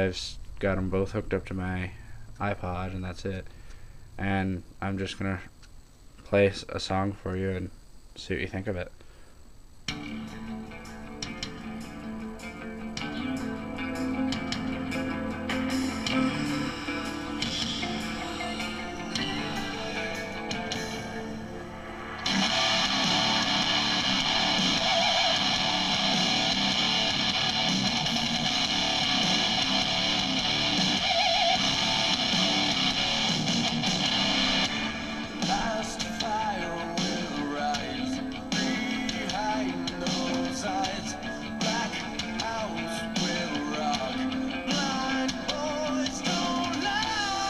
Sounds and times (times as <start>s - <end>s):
Speech: 0.0s - 3.5s, 4.2s - 5.5s, 6.3s - 9.0s.